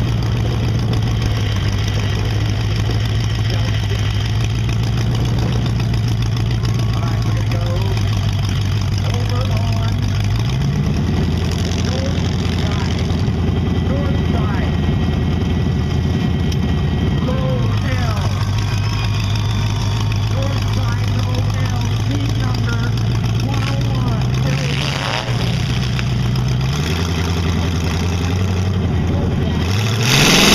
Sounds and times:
Speech: 6.9 - 8.0, 9.0 - 10.1, 11.8 - 13.0, 13.8 - 14.8, 17.2 - 18.3, 20.3 - 24.9.

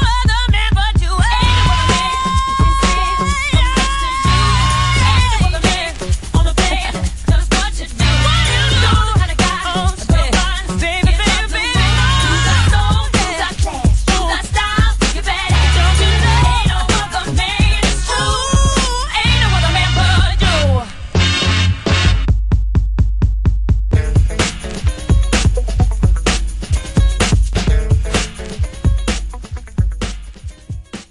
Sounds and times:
Music: 0.0 - 31.1.

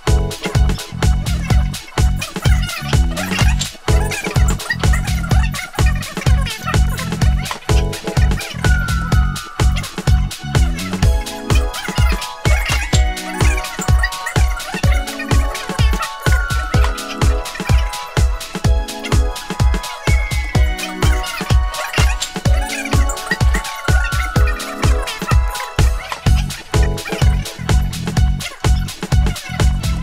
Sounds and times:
Music: 0.0 - 30.0.

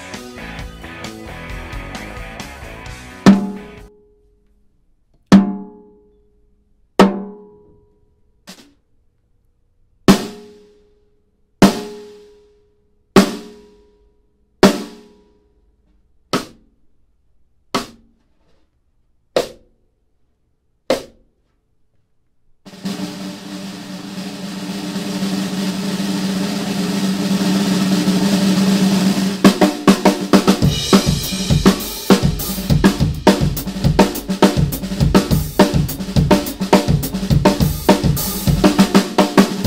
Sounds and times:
Snare drum: 3.2 - 3.8, 10.1 - 10.7, 22.7 - 39.6.

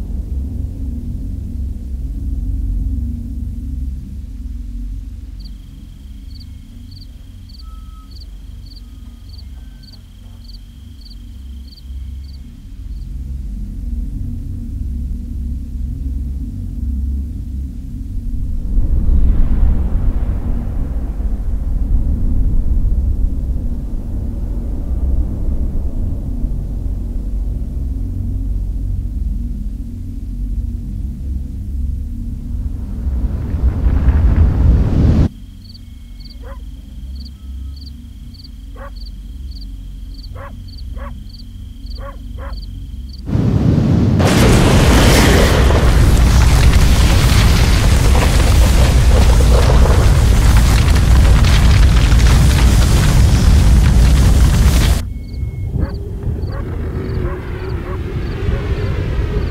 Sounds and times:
Outside, rural or natural: 0.0 - 59.5.

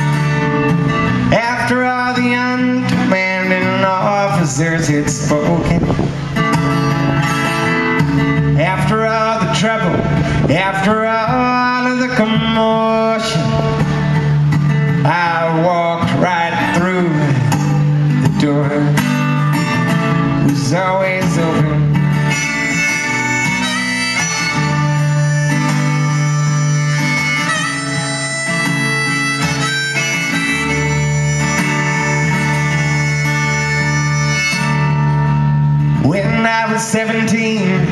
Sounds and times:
Music: 0.0 - 37.9.

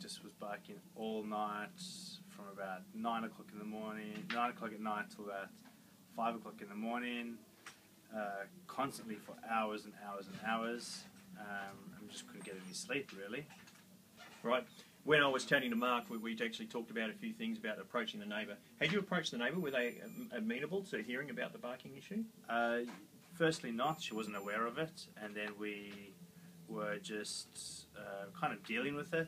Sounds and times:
Speech: 0.0 - 5.5, 6.1 - 7.4, 8.1 - 13.5, 14.4 - 29.2.

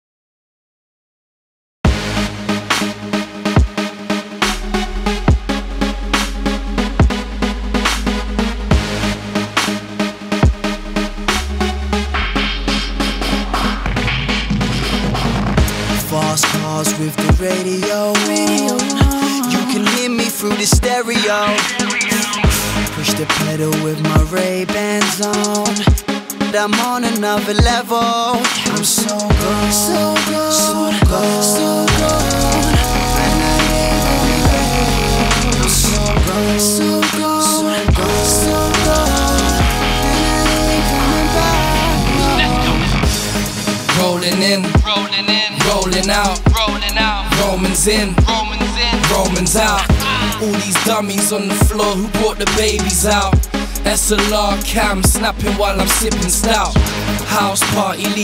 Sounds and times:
Pop music: 1.9 - 58.2.

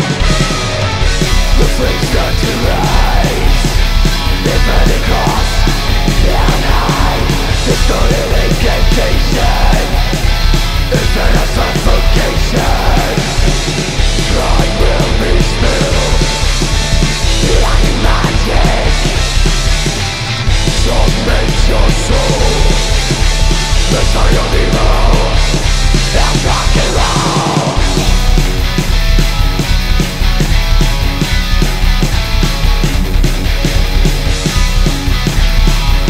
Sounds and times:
Heavy metal: 0.0 - 36.0
Punk rock: 0.0 - 36.0
Rock and roll: 0.0 - 36.0.

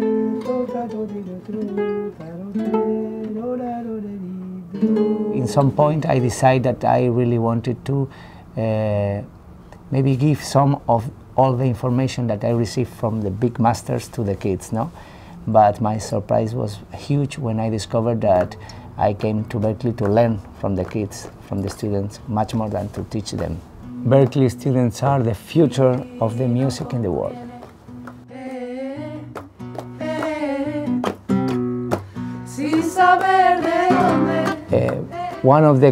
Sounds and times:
Speech: 5.4 - 9.3, 9.9 - 14.9, 15.5 - 27.4, 34.7 - 35.9.

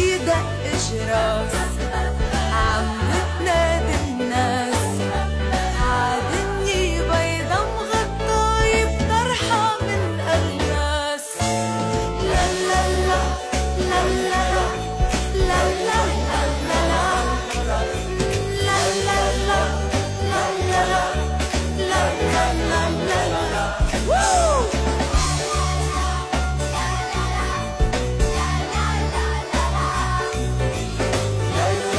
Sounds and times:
Singing: 0.0 - 11.4, 12.2 - 31.9
Christian music: 0.0 - 31.9
Christmas music: 0.0 - 31.9.

